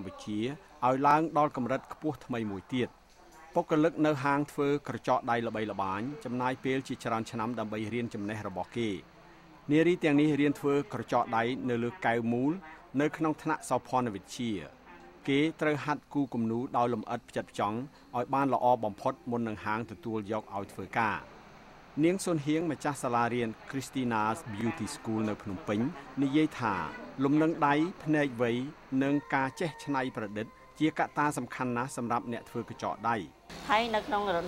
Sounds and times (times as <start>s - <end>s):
Speech: 0.0s - 9.1s, 9.7s - 21.3s, 22.0s - 34.4s.